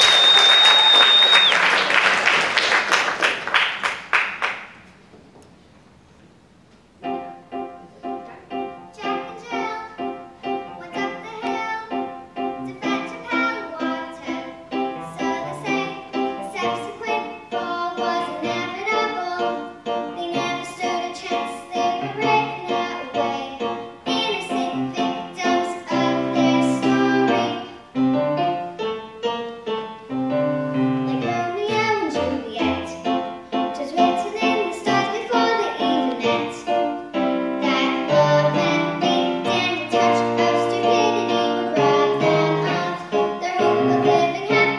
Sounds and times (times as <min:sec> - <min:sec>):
Music: 0:07.0 - 0:44.7
Child singing: 0:08.9 - 0:27.9, 0:31.0 - 0:36.9, 0:37.6 - 0:44.7.